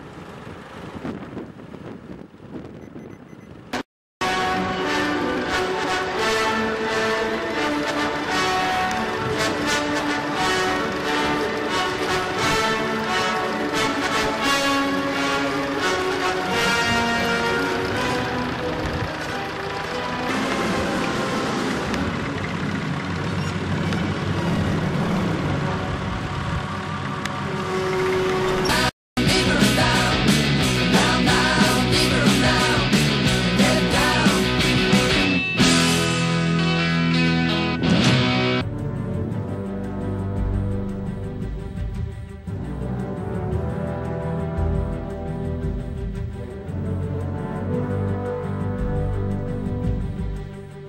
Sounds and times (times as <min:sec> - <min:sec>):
Grunge: 0:28.7 - 0:38.6.